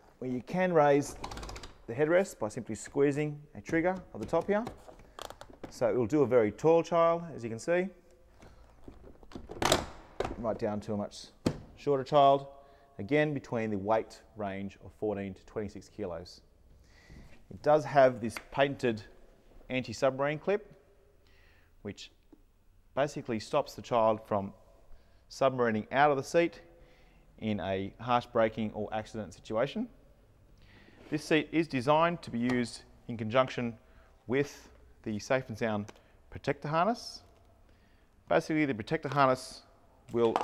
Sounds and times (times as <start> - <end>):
Speech: 0.2 - 1.2, 1.9 - 4.8, 5.7 - 8.0, 10.4 - 16.4, 17.5 - 20.8, 21.8 - 22.2, 23.0 - 24.6, 25.3 - 26.7, 27.4 - 30.0, 31.1 - 37.3, 38.3 - 40.4.